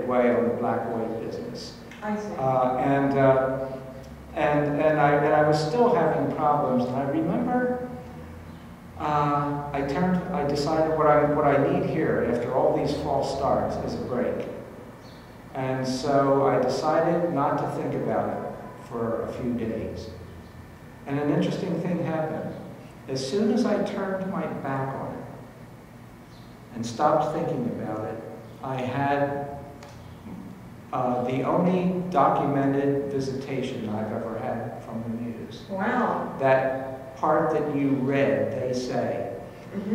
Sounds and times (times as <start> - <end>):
Speech: 0.0 - 3.6, 4.3 - 7.9, 9.0 - 14.6, 15.6 - 20.2, 21.1 - 25.3, 26.7 - 29.5, 30.3 - 39.9.